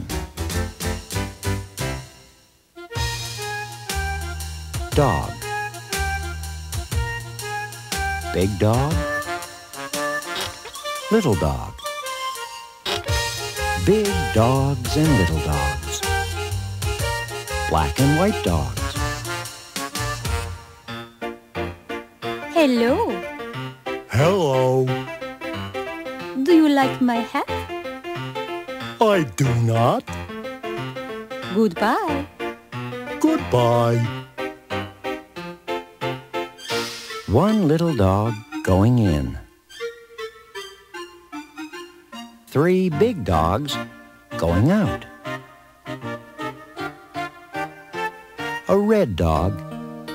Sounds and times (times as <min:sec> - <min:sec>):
Music: 0:00.0 - 0:50.1
Speech: 0:05.0 - 0:05.4, 0:08.3 - 0:09.1, 0:11.1 - 0:11.8, 0:13.8 - 0:16.1, 0:17.7 - 0:19.0, 0:22.6 - 0:23.2, 0:24.1 - 0:25.0, 0:26.4 - 0:27.5, 0:29.0 - 0:30.1, 0:31.5 - 0:32.2, 0:33.2 - 0:34.1, 0:37.3 - 0:39.5, 0:42.5 - 0:43.8, 0:44.4 - 0:45.1, 0:48.7 - 0:49.6.